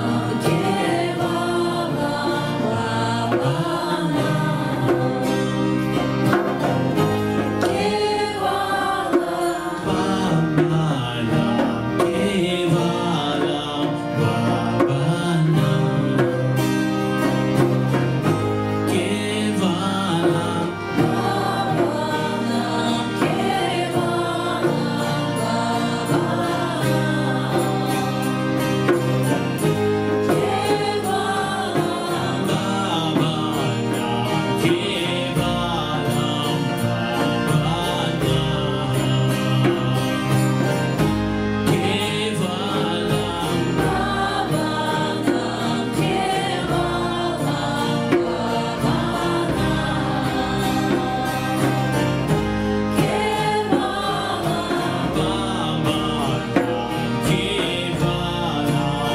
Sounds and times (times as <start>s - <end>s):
Gospel music: 0.0s - 59.1s.